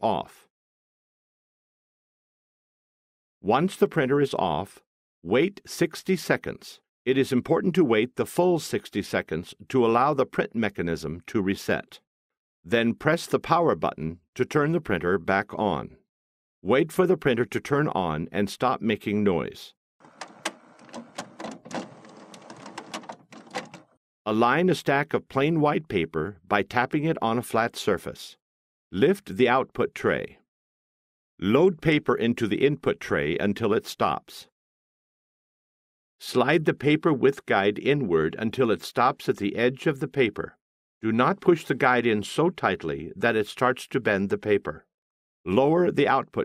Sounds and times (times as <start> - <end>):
Speech: 0.0 - 0.5, 3.4 - 12.0, 12.7 - 16.0, 16.6 - 19.8, 24.3 - 28.4, 29.0 - 30.4, 31.4 - 34.5, 36.2 - 44.9, 45.5 - 46.4.